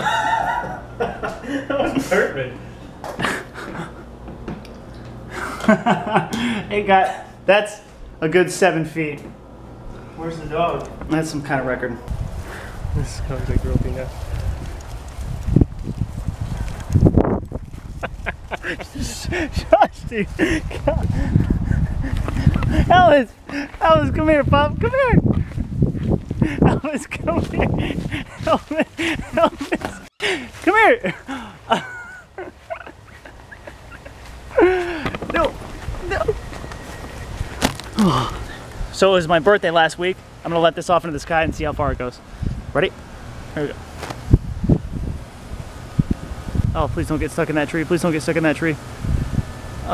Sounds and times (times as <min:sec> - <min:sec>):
Speech: 0:22.9 - 0:25.2, 0:39.0 - 0:42.2, 0:46.8 - 0:48.8.